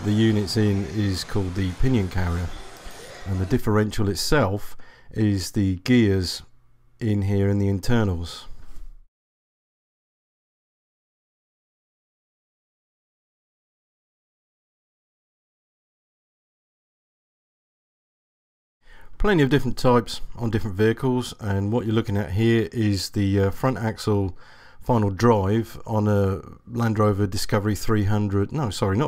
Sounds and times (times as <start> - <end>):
Speech: 0.0 - 8.5, 19.2 - 29.0.